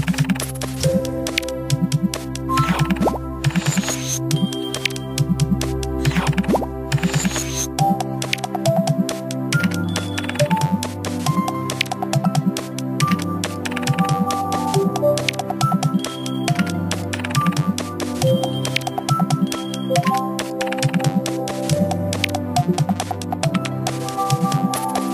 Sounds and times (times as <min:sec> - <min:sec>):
Music: 0:00.0 - 0:25.1.